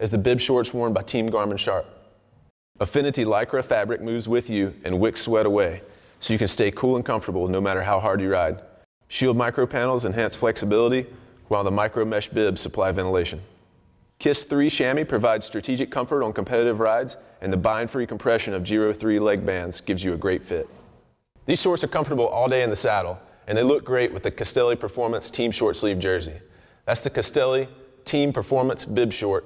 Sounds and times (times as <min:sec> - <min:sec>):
Speech: 0:00.0 - 0:02.0, 0:02.8 - 0:13.5, 0:14.2 - 0:20.8, 0:21.5 - 0:29.4.